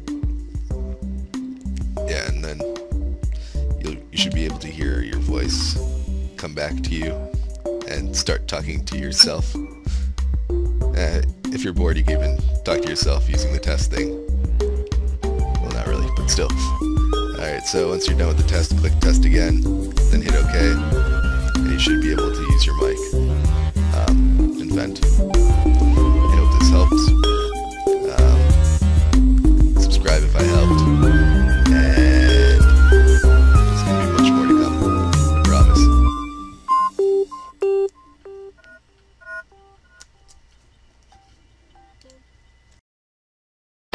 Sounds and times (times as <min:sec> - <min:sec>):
Music of Africa: 0:06.8 - 0:37.0.